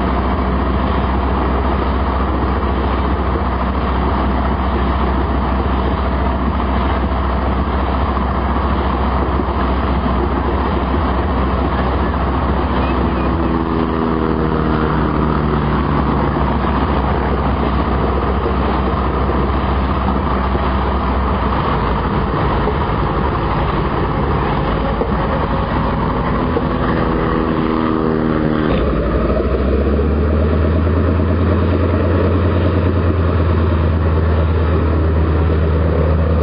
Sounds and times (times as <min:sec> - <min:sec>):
Propeller, airscrew: 0:00.0 - 0:36.4.